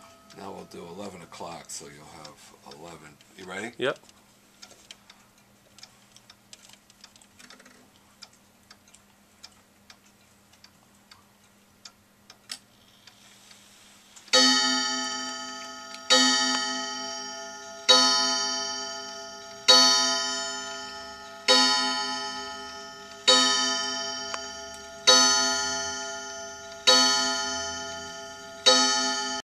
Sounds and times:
Tick-tock: 15.5 - 29.4.

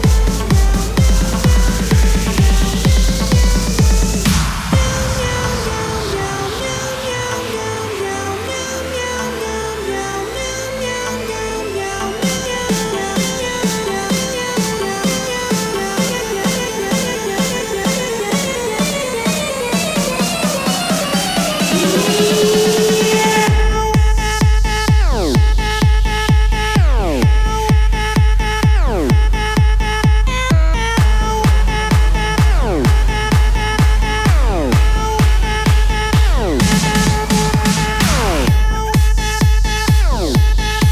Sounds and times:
Music: 0.0 - 40.9.

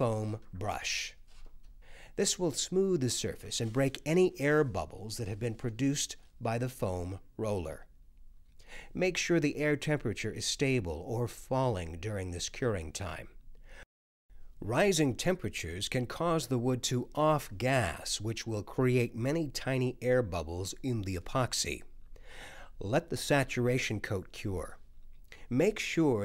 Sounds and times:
Speech: 0.0 - 1.2, 2.2 - 7.9, 9.0 - 13.4, 14.6 - 21.9, 22.8 - 24.8, 25.5 - 26.2.

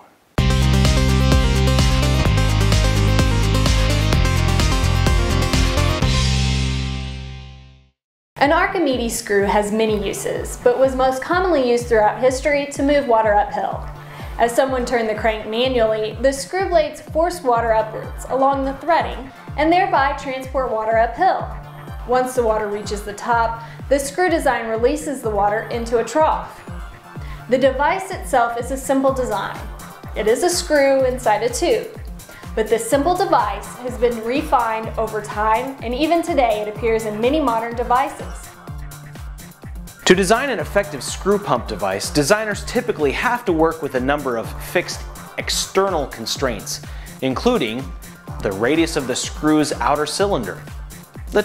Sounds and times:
Music: 0.4 - 51.4
Speech: 8.4 - 13.8, 14.4 - 21.5, 22.1 - 26.5, 27.5 - 29.6, 30.2 - 32.0, 32.6 - 38.4, 40.1 - 50.6.

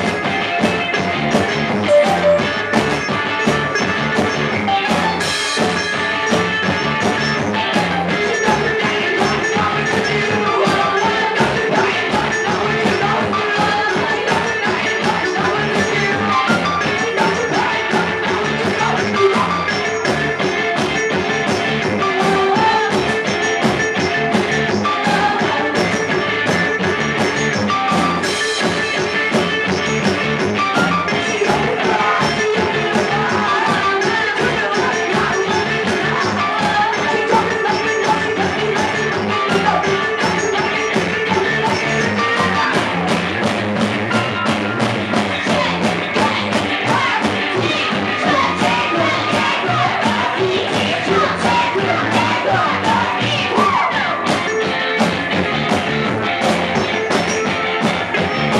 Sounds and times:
Music: 0.0 - 58.5.

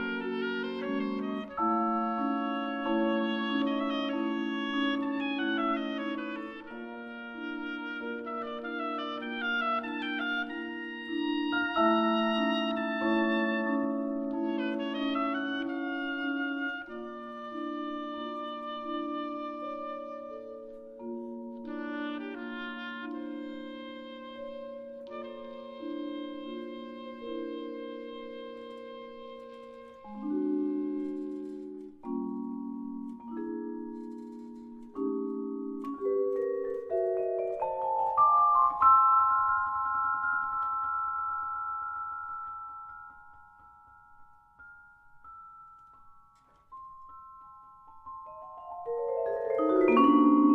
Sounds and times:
Vibraphone: 0.1 - 50.5.

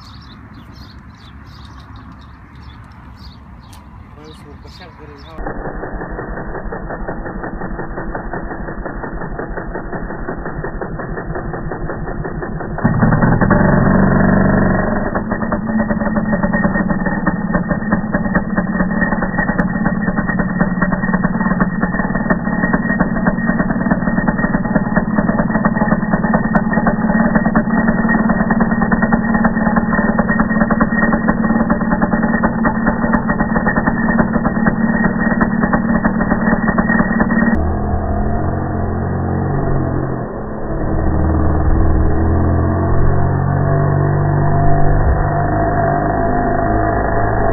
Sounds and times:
Speech: 4.2 - 5.5.

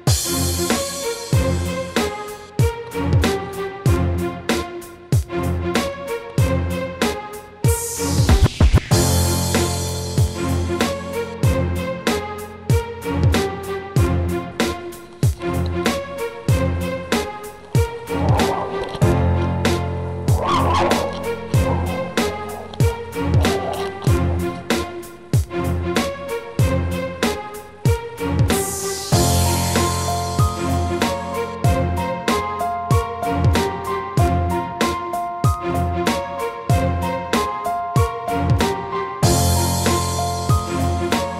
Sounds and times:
Music: 0.0 - 41.3.

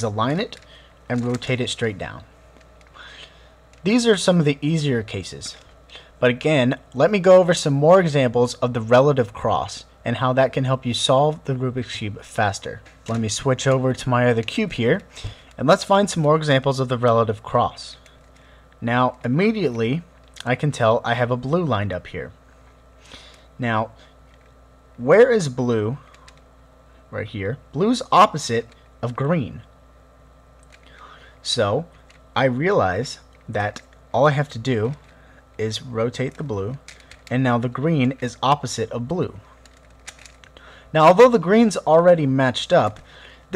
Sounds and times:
Narration, monologue: 0.0 - 43.5.

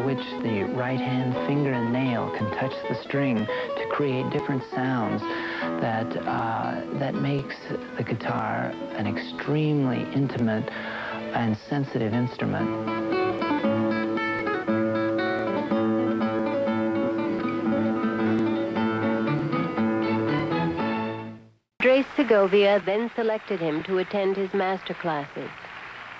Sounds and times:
Speech: 0.0 - 10.7, 11.3 - 12.7, 21.8 - 25.6
Strum: 0.0 - 21.4.

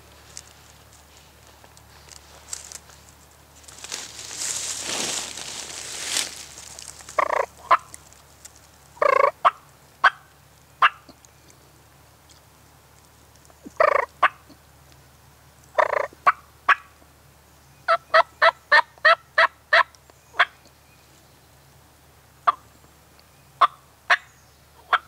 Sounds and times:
Turkey: 7.2 - 8.0, 9.0 - 11.2, 13.8 - 14.5, 15.8 - 16.9, 17.9 - 20.6, 23.6 - 25.0.

